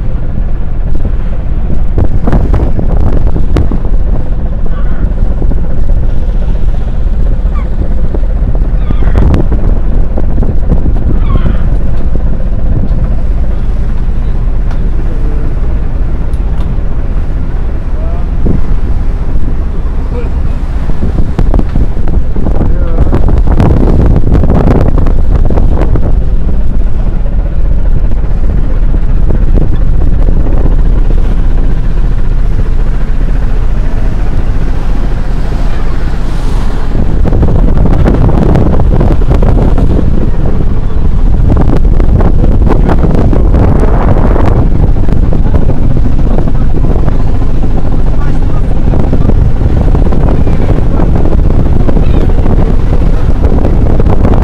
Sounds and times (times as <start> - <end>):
Vehicle: 0.0 - 54.4
Speech: 20.0 - 20.6, 22.7 - 23.1, 48.1 - 48.8.